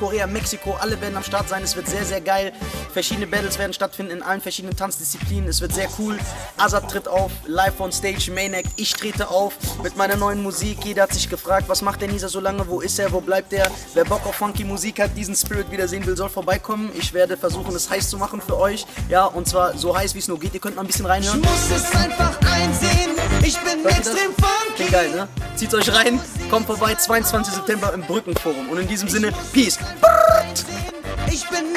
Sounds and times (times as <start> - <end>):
Speech: 0.0 - 21.6, 24.8 - 29.9
Music: 0.0 - 31.7.